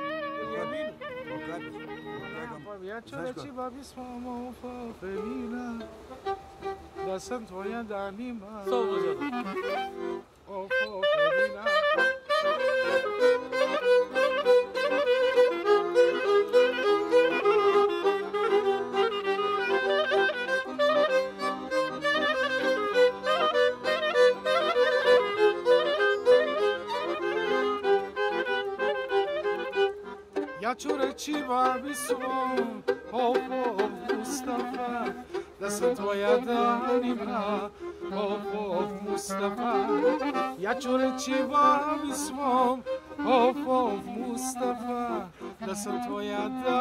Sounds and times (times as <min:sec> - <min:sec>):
Music: 0:00.0 - 0:46.8.